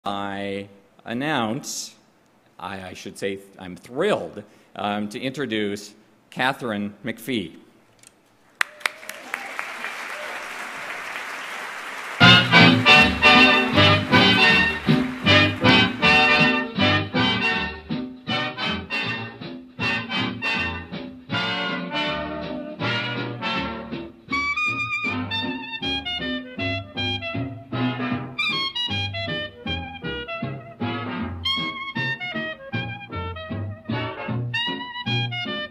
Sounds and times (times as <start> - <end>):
Speech: 0.0 - 2.0, 2.6 - 7.6
Applause: 8.5 - 16.8.